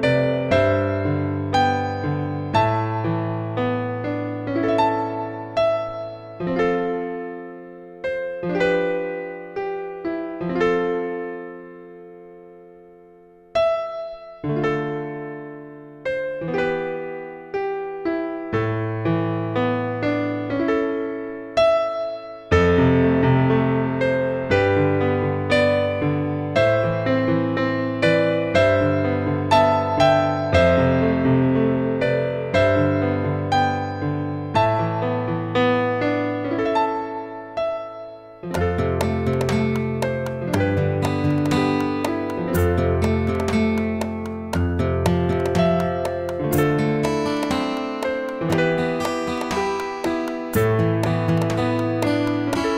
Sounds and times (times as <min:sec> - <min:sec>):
Music: 0:00.0 - 0:52.7.